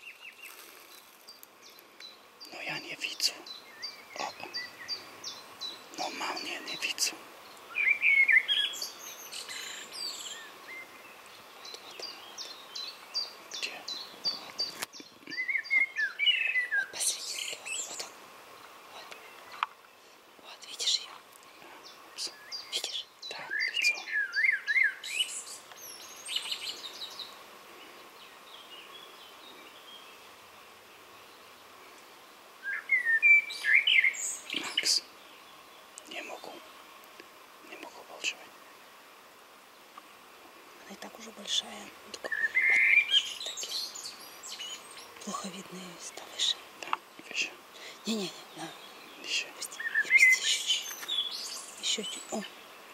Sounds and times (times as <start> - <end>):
Environmental noise: 0.0 - 52.9
Outside, rural or natural: 0.0 - 52.9
Chirp, tweet: 1.3 - 18.1, 21.8 - 27.4, 32.6 - 36.6, 41.6 - 52.6.